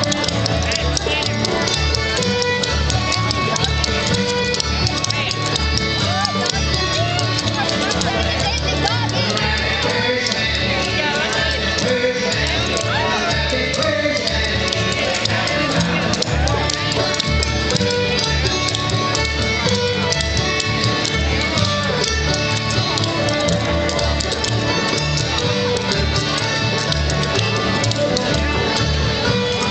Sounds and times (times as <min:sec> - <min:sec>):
Music: 0:00.0 - 0:29.7.